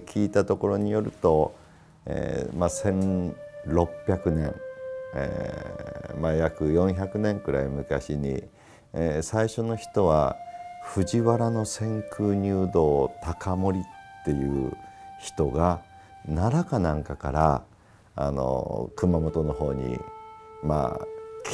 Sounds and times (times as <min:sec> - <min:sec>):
Speech: 0:00.0 - 0:04.6, 0:05.2 - 0:21.5
Music: 0:00.0 - 0:21.5.